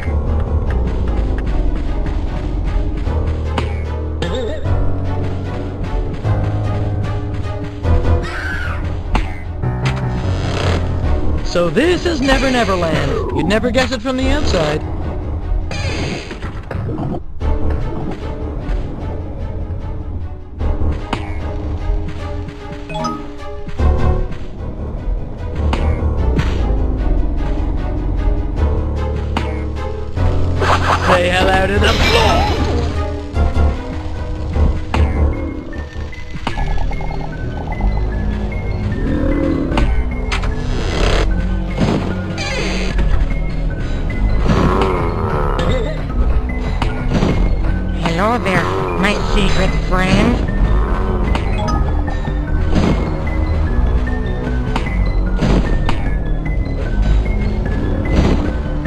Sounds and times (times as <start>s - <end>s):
Music: 0.0s - 58.8s
Speech: 11.5s - 14.8s, 31.0s - 32.6s, 48.0s - 50.4s.